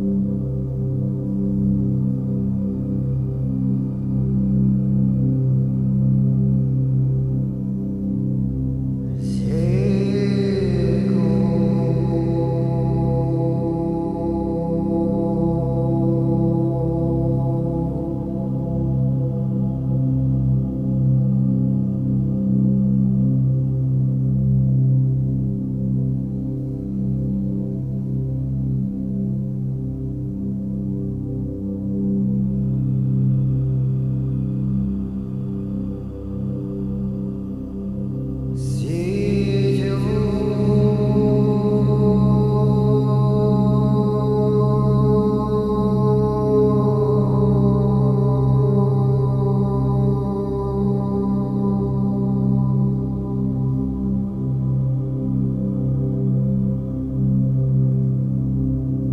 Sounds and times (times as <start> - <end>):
Music: 0.0 - 59.1.